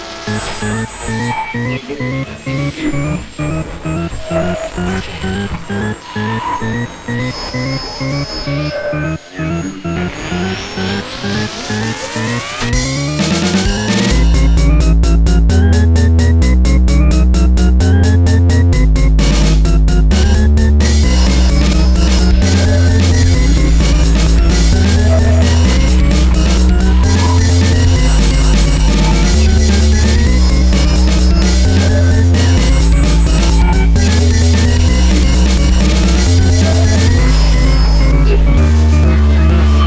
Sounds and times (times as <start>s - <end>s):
Dubstep: 0.0s - 39.8s.